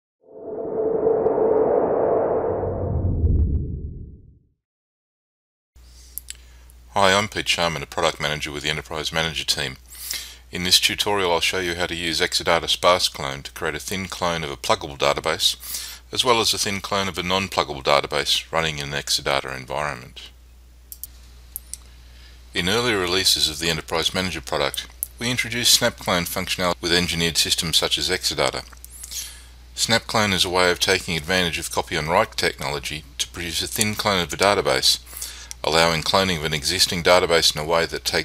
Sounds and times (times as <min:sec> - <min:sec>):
Speech: 0:06.9 - 0:09.8, 0:10.5 - 0:20.4, 0:22.6 - 0:28.8, 0:29.8 - 0:38.2.